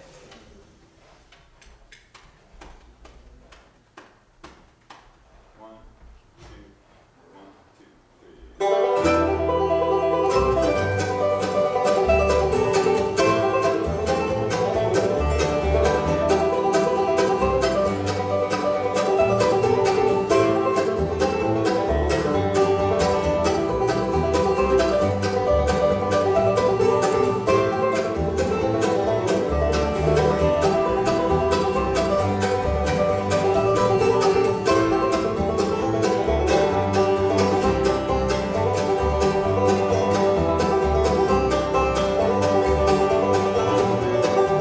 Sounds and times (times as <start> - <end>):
Banjo: 8.6 - 44.6
Country: 8.6 - 44.6
Guitar: 8.6 - 44.6.